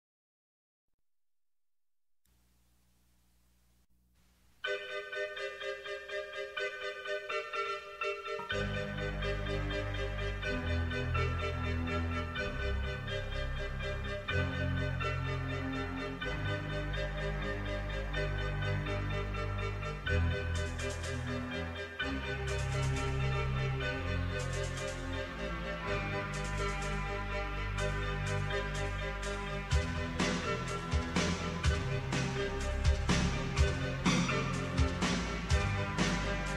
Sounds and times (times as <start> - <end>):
Music: 4.5 - 36.5.